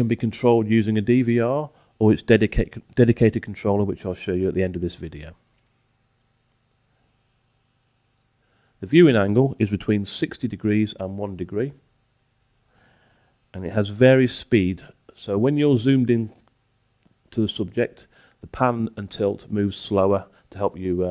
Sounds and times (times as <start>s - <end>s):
Speech: 0.0s - 5.4s, 8.8s - 11.9s, 13.5s - 16.5s, 17.3s - 21.1s.